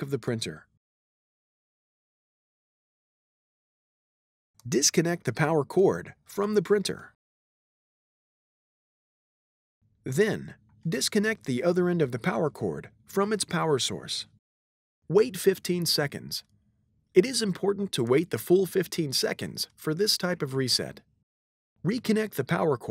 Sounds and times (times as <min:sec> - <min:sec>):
Speech: 0:00.0 - 0:00.7, 0:04.6 - 0:07.2, 0:10.1 - 0:14.4, 0:15.1 - 0:16.5, 0:17.2 - 0:21.1, 0:21.8 - 0:22.9.